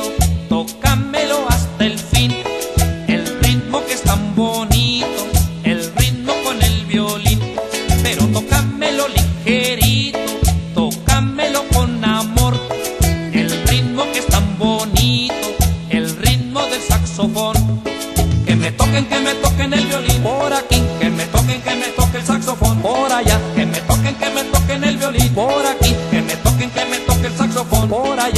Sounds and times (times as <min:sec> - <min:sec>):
Musical instrument: 0:00.0 - 0:28.3.